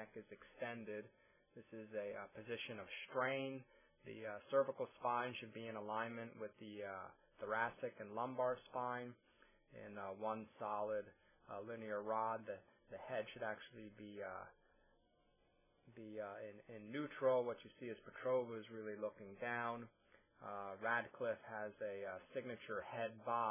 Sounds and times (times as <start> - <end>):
Speech: 0.0 - 14.6, 15.9 - 23.5.